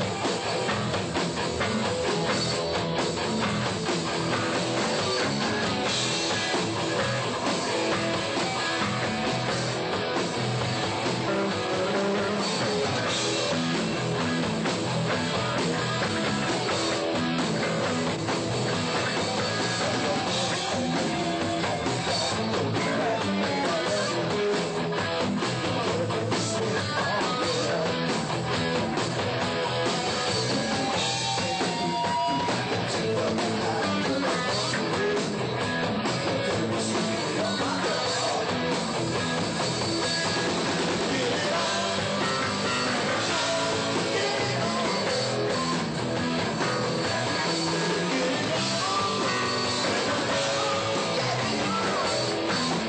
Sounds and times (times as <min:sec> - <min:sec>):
Music: 0:00.0 - 0:52.8.